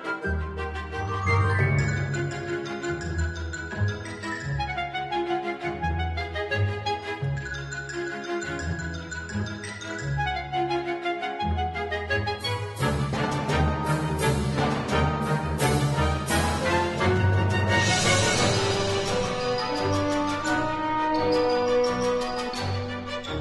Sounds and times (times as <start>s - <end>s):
Music: 0.0s - 23.4s.